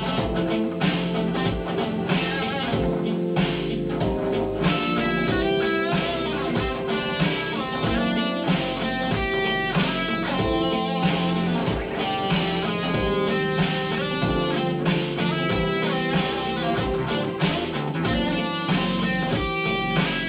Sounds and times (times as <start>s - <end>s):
Acoustic guitar: 0.0s - 20.2s
Electric guitar: 0.0s - 20.2s.